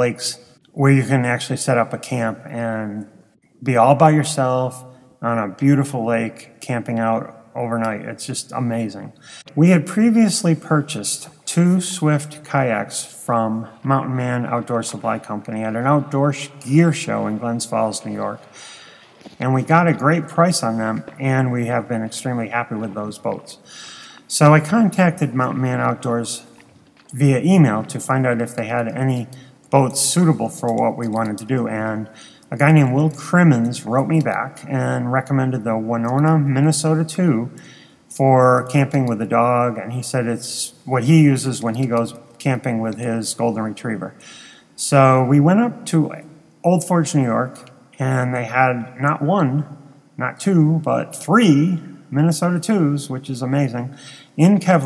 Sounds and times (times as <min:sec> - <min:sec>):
Speech: 0:00.0 - 0:18.6, 0:19.3 - 0:23.7, 0:24.3 - 0:44.2, 0:44.8 - 0:54.8.